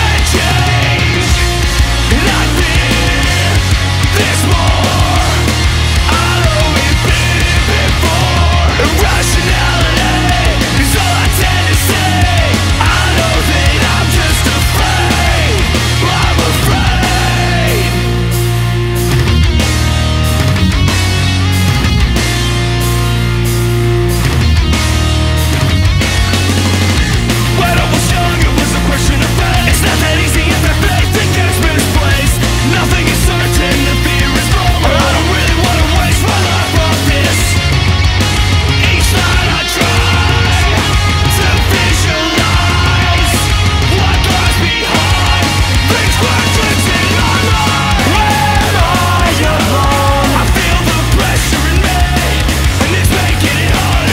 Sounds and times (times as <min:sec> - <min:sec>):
Music: 0:00.0 - 0:54.1.